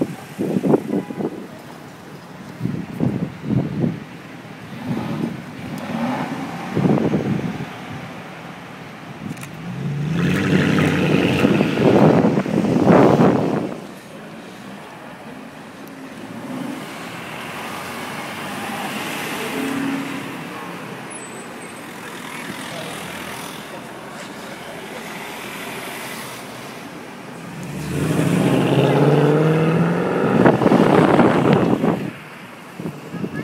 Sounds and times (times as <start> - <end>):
Speech: 22.0 - 25.4, 32.9 - 33.4.